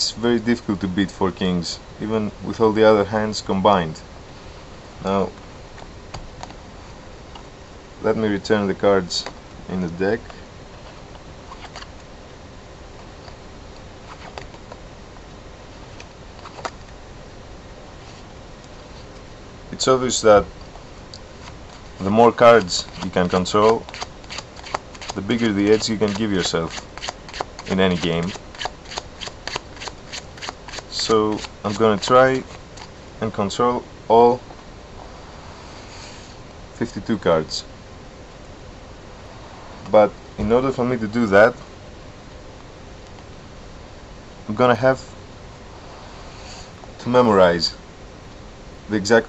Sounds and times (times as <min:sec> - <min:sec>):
Speech: 0:00.0 - 0:04.0, 0:05.0 - 0:05.3, 0:08.0 - 0:10.3, 0:19.7 - 0:20.5, 0:22.0 - 0:23.8, 0:25.2 - 0:26.7, 0:27.7 - 0:28.4, 0:30.9 - 0:32.5, 0:33.2 - 0:34.4, 0:36.8 - 0:37.7, 0:39.9 - 0:41.6, 0:44.5 - 0:45.1, 0:47.0 - 0:47.8, 0:48.9 - 0:49.2.